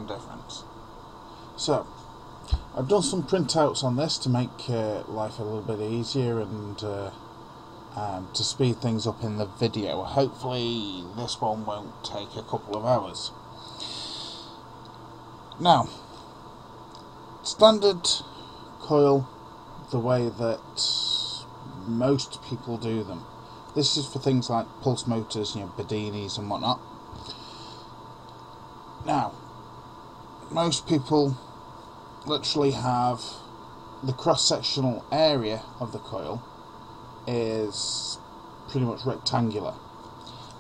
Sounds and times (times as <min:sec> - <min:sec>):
Speech: 0:00.0 - 0:00.7, 0:01.6 - 0:01.9, 0:02.8 - 0:07.2, 0:07.9 - 0:13.4, 0:15.6 - 0:16.0, 0:17.4 - 0:26.8, 0:29.0 - 0:29.4, 0:30.4 - 0:31.4, 0:32.2 - 0:36.5, 0:37.3 - 0:39.8.